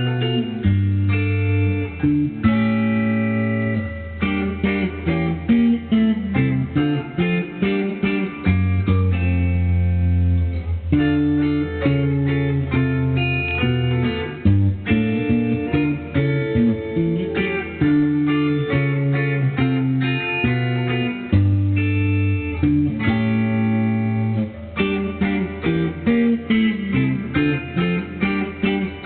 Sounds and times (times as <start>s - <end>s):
Music: 0.0s - 29.0s.